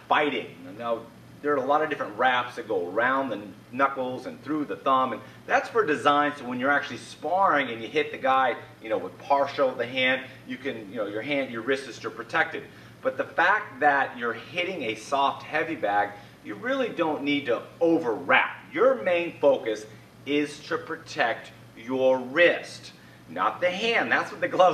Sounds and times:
Speech: 0:00.0 - 0:24.7.

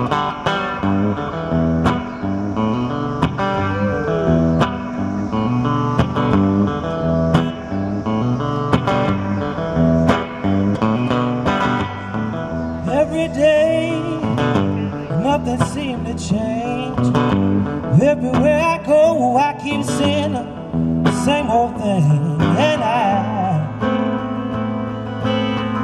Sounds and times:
Country: 0:00.0 - 0:25.8
Guitar: 0:00.0 - 0:25.8.

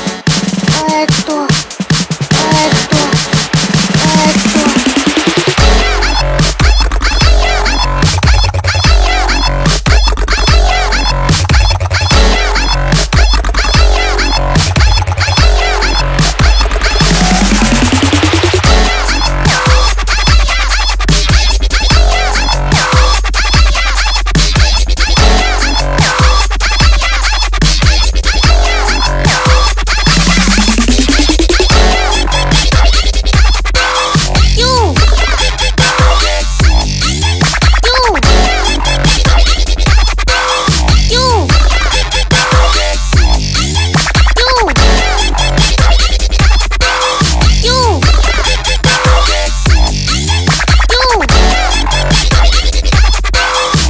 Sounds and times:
Dubstep: 0:00.0 - 0:53.9.

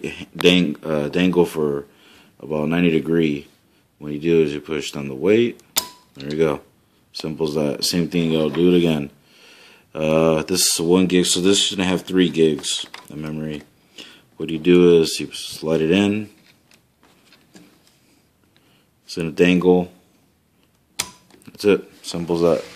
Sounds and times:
Speech: 0:00.0 - 0:05.6, 0:06.2 - 0:09.2, 0:10.0 - 0:13.7, 0:14.4 - 0:16.4, 0:19.1 - 0:20.0, 0:21.5 - 0:22.7
Inside, small room: 0:00.0 - 0:22.7.

